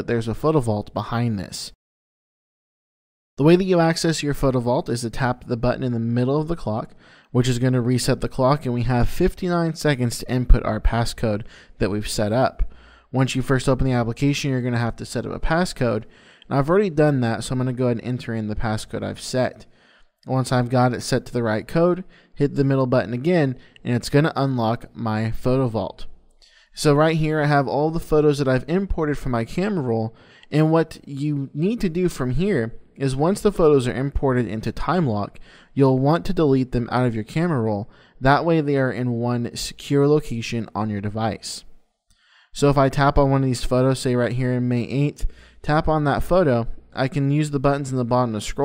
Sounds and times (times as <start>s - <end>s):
Speech: 0.0s - 1.8s, 3.4s - 41.7s, 42.5s - 48.6s.